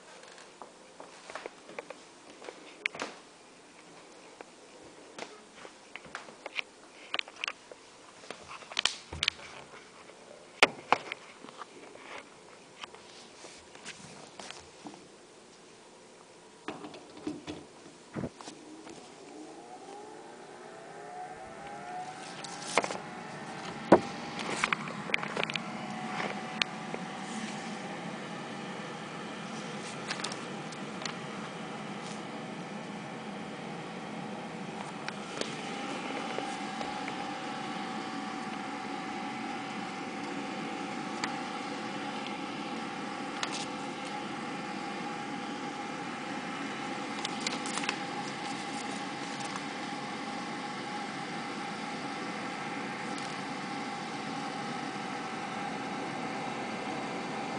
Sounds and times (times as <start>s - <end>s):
Hum: 0.0s - 57.5s
Mains hum: 0.0s - 57.5s.